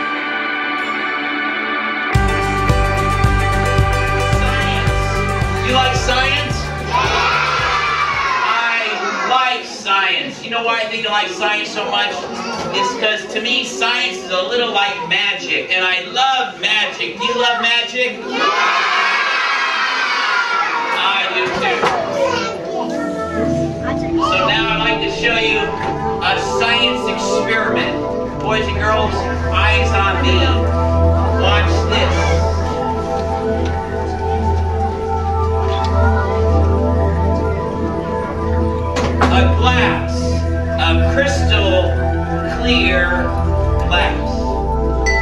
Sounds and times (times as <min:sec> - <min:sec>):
Music: 0:00.0 - 0:08.5, 0:21.7 - 0:45.2
Speech: 0:05.6 - 0:06.7, 0:08.5 - 0:18.3, 0:21.0 - 0:22.6, 0:23.9 - 0:30.7, 0:39.2 - 0:44.5.